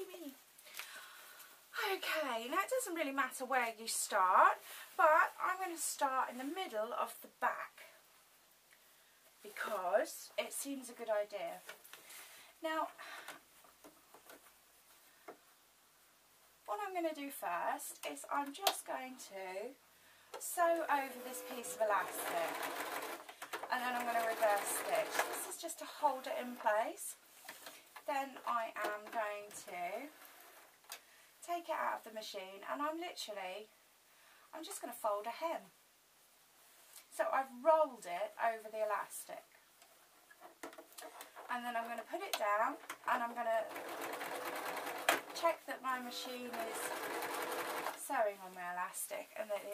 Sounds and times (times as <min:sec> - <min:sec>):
Sewing machine: 0:20.9 - 0:25.6, 0:43.4 - 0:45.5, 0:46.1 - 0:48.0.